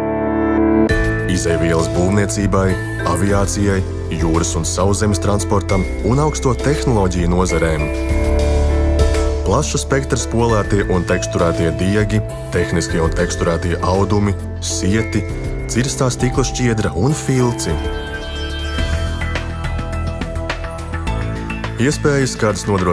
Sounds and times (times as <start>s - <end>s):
Music: 0.0s - 22.9s
Speech: 1.2s - 8.0s, 9.4s - 17.9s, 21.8s - 22.9s.